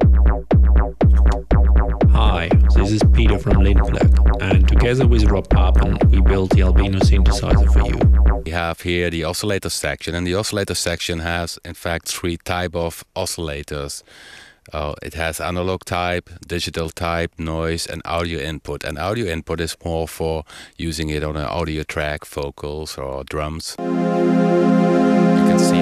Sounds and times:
Synthesizer: 1.0 - 8.4, 23.8 - 25.8
Speech: 2.1 - 14.1, 14.7 - 23.8, 25.4 - 25.8.

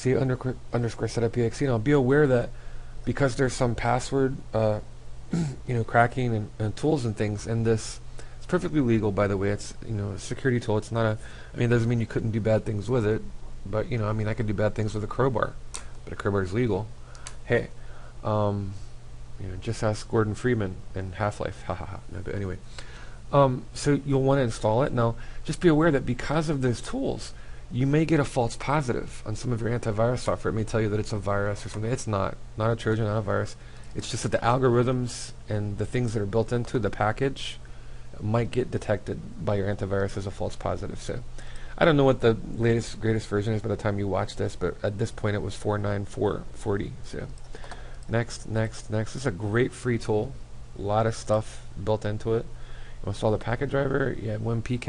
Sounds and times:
Speech: 0.0 - 22.7, 23.3 - 47.4, 48.1 - 54.8.

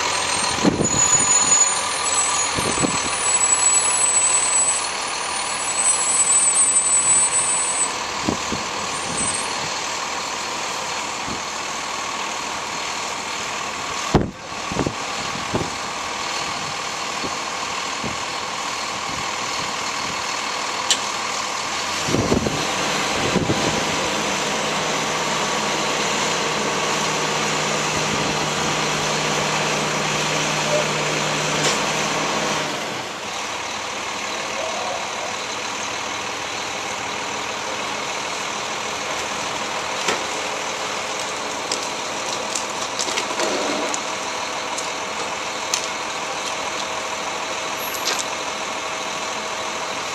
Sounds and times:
Truck: 0.0 - 50.1.

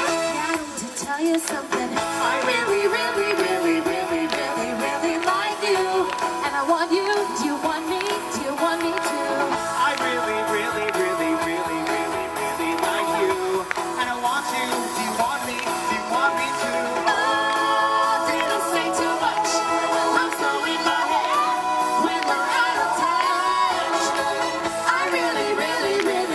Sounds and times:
Rhythm and blues: 0.0 - 26.3
Singing: 0.0 - 26.3.

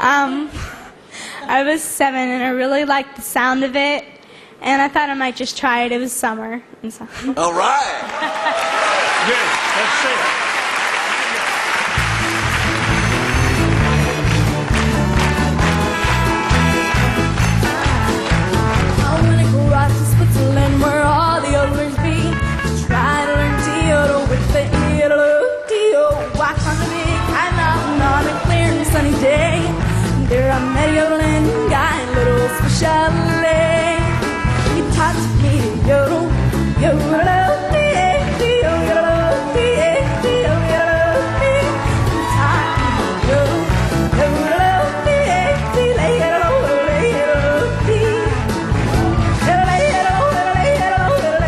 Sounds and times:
Music: 11.6 - 51.4.

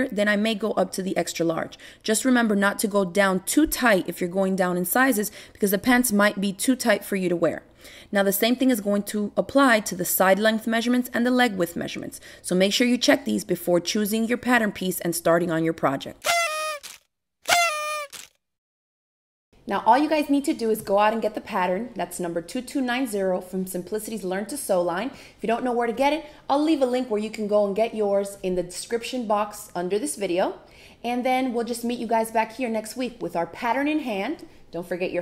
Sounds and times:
Speech: 0.0 - 16.2, 19.6 - 35.2.

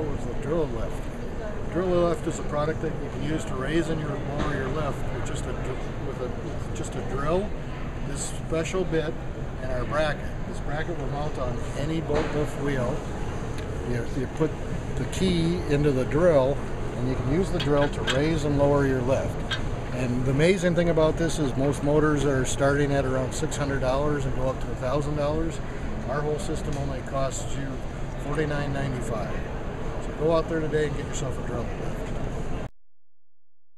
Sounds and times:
Speech: 0.0 - 1.0, 1.6 - 7.5, 8.1 - 13.0, 13.8 - 29.4, 30.0 - 32.2.

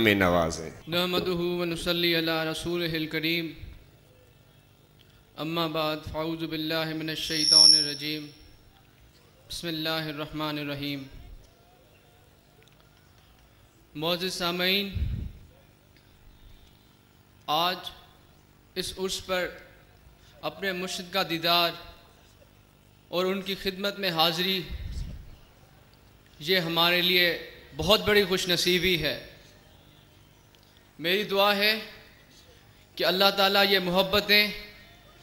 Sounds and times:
Male speech, man speaking: 0.0 - 3.7, 5.4 - 8.4, 9.4 - 11.3, 14.0 - 15.1, 17.5 - 18.1, 18.8 - 19.8, 20.4 - 22.0, 23.1 - 24.8, 26.4 - 29.4, 31.0 - 32.0, 33.0 - 35.2
Narration, monologue: 0.0 - 4.0, 4.6 - 11.3, 13.5 - 25.1, 26.0 - 29.6, 30.5 - 35.0.

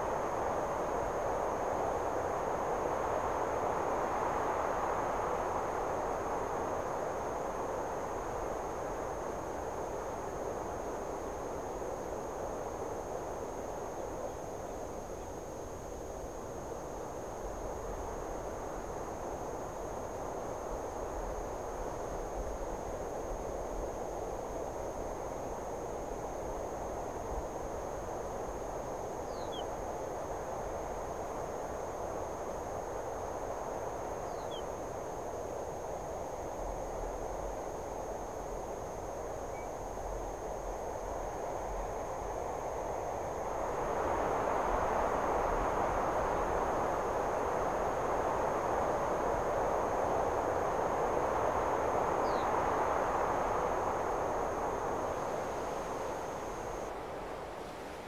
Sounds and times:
Bird: 29.3 - 29.7, 34.3 - 34.7.

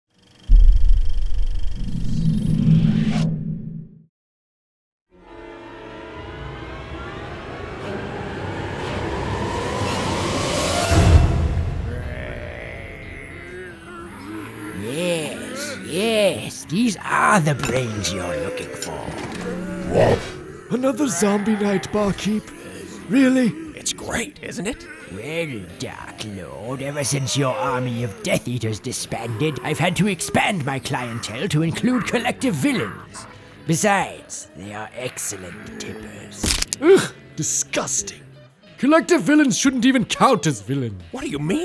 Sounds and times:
Sound effect: 0.2 - 4.1, 6.7 - 12.4, 19.0 - 20.5
Music: 5.1 - 41.6.

